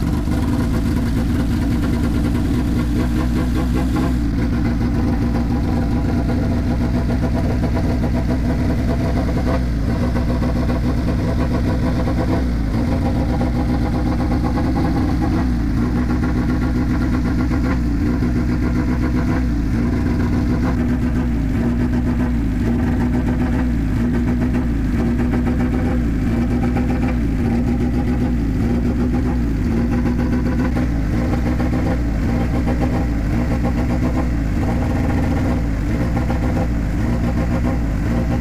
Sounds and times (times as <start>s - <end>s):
Car: 0.0s - 38.4s
Medium engine (mid frequency): 0.0s - 38.4s
Accelerating, revving, vroom: 2.0s - 38.4s.